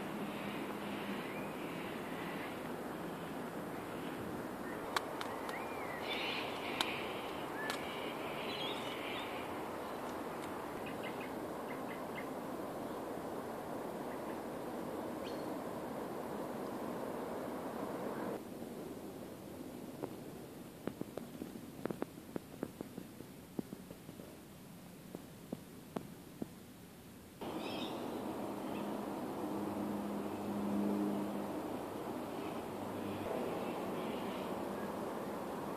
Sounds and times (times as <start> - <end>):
Outside, rural or natural: 0.0 - 35.7.